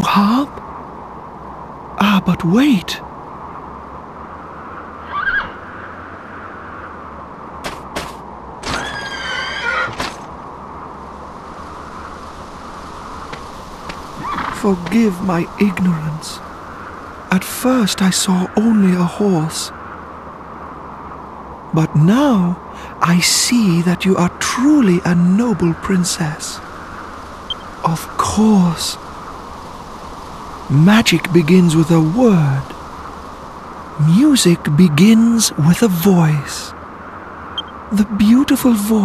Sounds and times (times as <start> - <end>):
Speech: 0.0 - 0.6, 2.0 - 3.0, 14.6 - 16.4, 17.3 - 19.7, 21.7 - 26.6, 27.8 - 29.0, 30.7 - 32.8, 34.0 - 36.8, 37.9 - 39.0
Outside, rural or natural: 0.0 - 39.0.